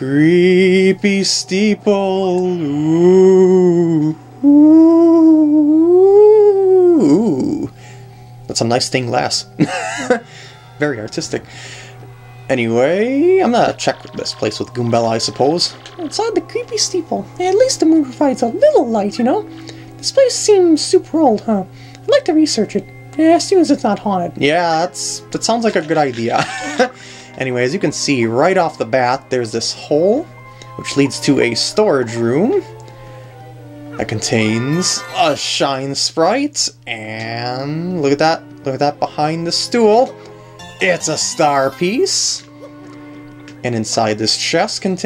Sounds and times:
Speech: 0.0 - 7.7, 12.5 - 19.4, 20.0 - 26.4, 27.4 - 32.7, 34.0 - 40.1, 40.8 - 42.5, 43.6 - 45.0
Music: 0.0 - 45.0.

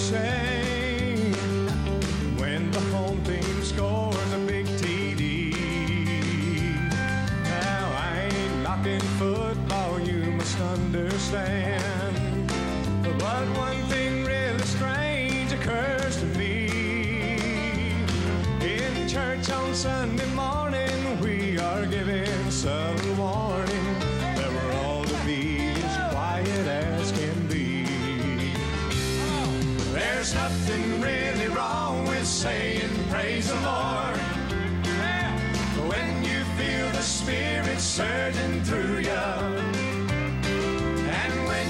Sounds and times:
Music: 0.0 - 41.6.

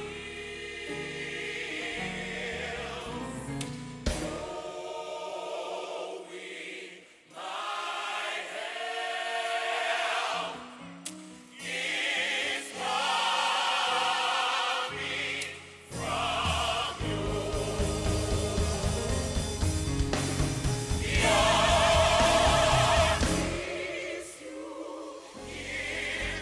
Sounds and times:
Music: 0.0 - 26.4.

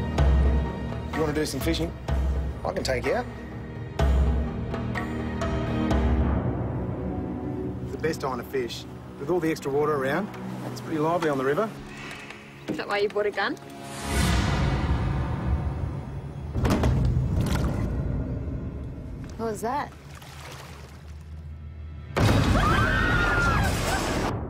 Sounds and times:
Music: 0.0 - 19.9, 21.4 - 24.4.

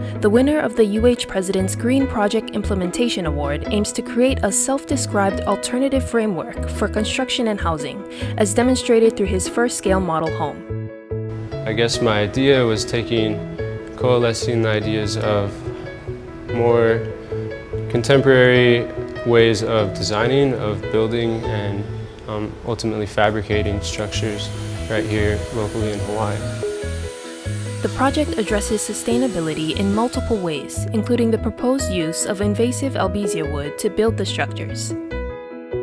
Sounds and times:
Music: 0.0 - 35.8
Speech: 0.2 - 10.6, 11.7 - 13.4, 14.0 - 15.6, 16.6 - 17.0, 18.0 - 26.6, 27.9 - 35.0.

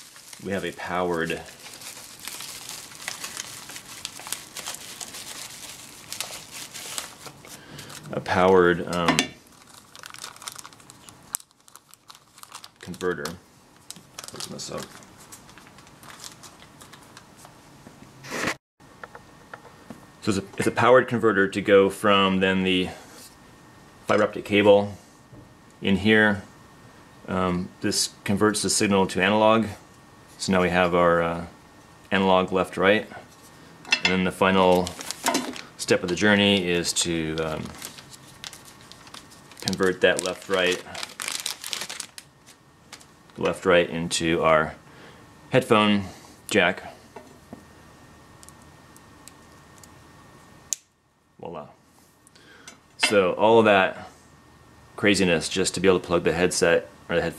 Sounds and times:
Speech: 0.4 - 1.6, 8.1 - 9.3, 12.8 - 13.4, 14.3 - 15.0, 20.2 - 23.0, 24.1 - 25.0, 25.8 - 26.5, 27.3 - 29.8, 30.4 - 31.5, 32.1 - 33.2, 34.1 - 35.0, 35.8 - 37.8, 39.6 - 41.0, 43.4 - 44.8, 45.5 - 47.0, 51.4 - 51.8, 53.0 - 54.1, 55.0 - 57.3.

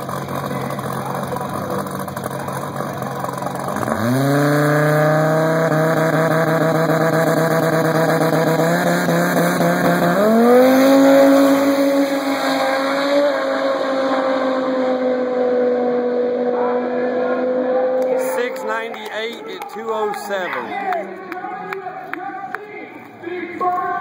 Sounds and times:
Speech: 18.0 - 24.0.

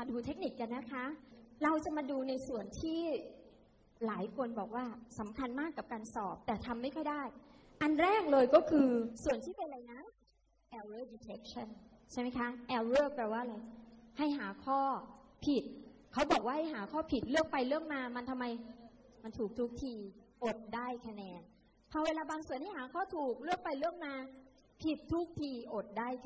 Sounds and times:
Speech: 0.0 - 3.4, 4.0 - 10.1, 10.7 - 21.4, 22.0 - 26.2.

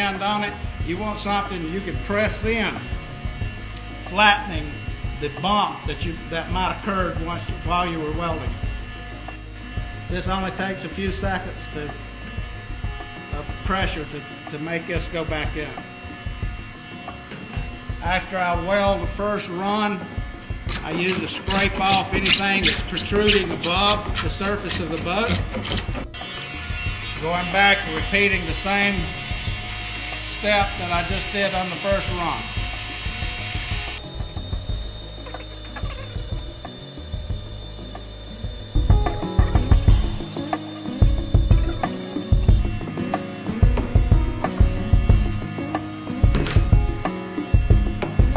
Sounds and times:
Ratchet, pawl: 34.0 - 42.6.

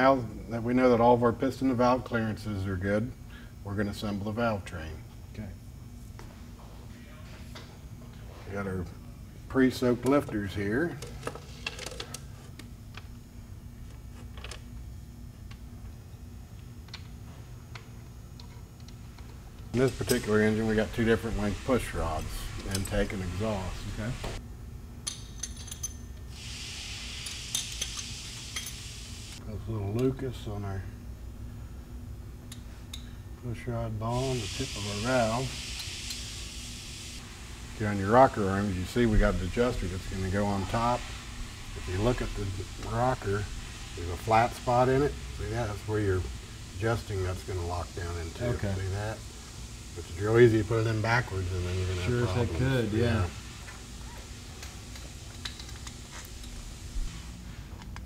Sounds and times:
Speech: 0.0 - 5.6, 8.4 - 11.0, 19.8 - 24.2, 29.4 - 31.0, 33.4 - 35.6, 37.8 - 41.0, 41.8 - 49.2, 50.0 - 53.4.

